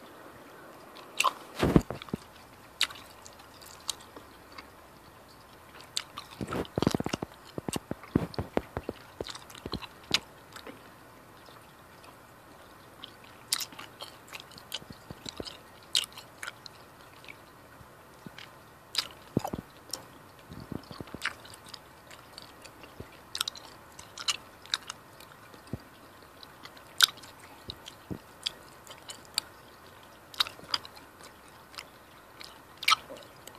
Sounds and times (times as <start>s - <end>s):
Chewing, mastication: 0.0s - 33.5s.